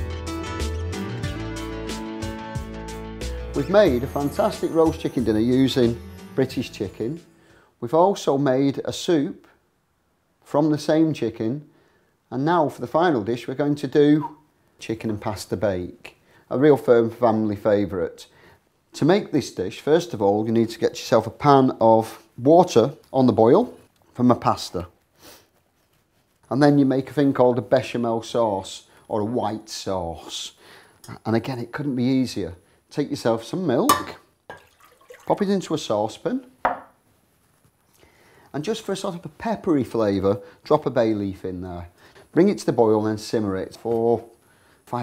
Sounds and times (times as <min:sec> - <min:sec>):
Speech: 0:03.6 - 0:07.2, 0:07.8 - 0:09.6, 0:10.5 - 0:11.7, 0:12.3 - 0:18.3, 0:19.0 - 0:25.0, 0:26.5 - 0:34.3, 0:35.3 - 0:36.6, 0:38.5 - 0:45.0.